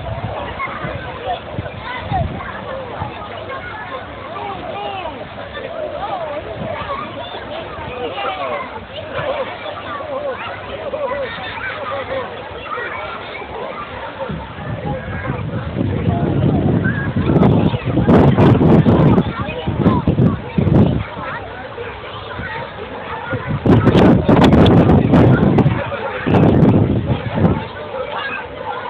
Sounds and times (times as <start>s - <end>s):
Speech: 0.0s - 28.8s.